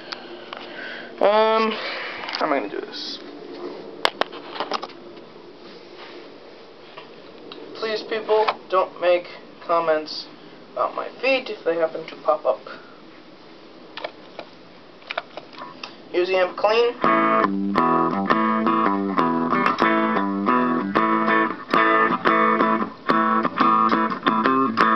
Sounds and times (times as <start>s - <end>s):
Speech: 1.2s - 1.8s, 2.4s - 3.3s, 7.8s - 12.9s, 16.1s - 17.0s.